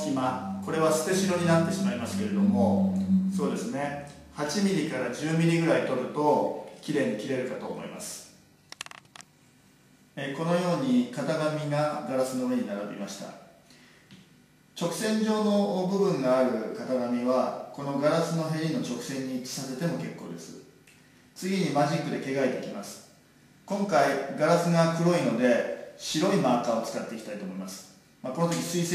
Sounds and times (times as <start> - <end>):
Speech: 0.0 - 8.4, 10.2 - 13.5, 14.8 - 20.7, 21.4 - 28.9.